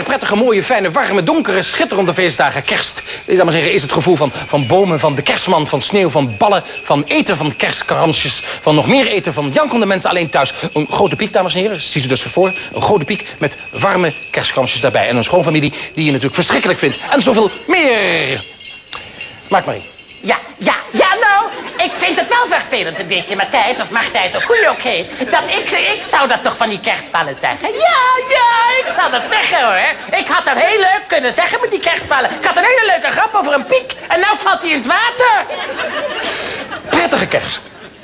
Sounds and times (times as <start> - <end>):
Speech: 0.0 - 18.5, 19.5 - 35.5, 36.9 - 37.7.